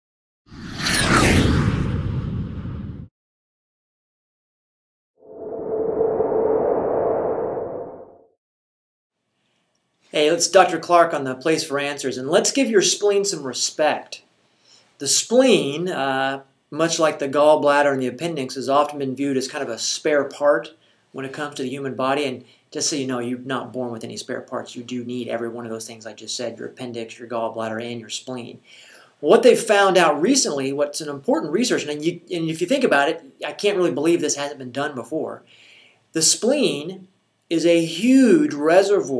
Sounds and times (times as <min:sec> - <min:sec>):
Inside, small room: 0:09.1 - 0:39.1.